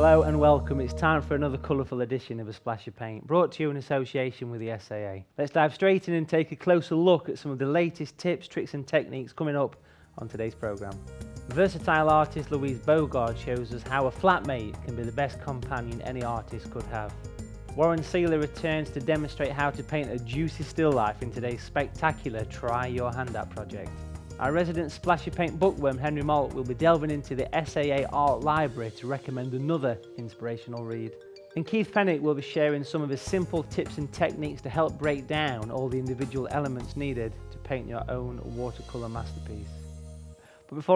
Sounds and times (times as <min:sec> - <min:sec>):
Music: 0:00.0 - 0:03.9, 0:07.0 - 0:40.9
Speech: 0:00.0 - 0:17.2, 0:17.8 - 0:39.8, 0:40.7 - 0:40.9.